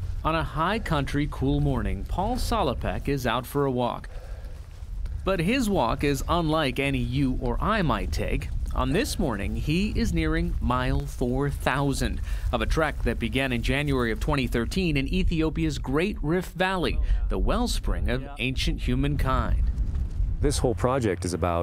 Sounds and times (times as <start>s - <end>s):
Speech: 0.3s - 4.1s, 5.3s - 19.6s, 20.4s - 21.6s
Walk, footsteps: 1.4s - 15.1s, 19.6s - 20.4s.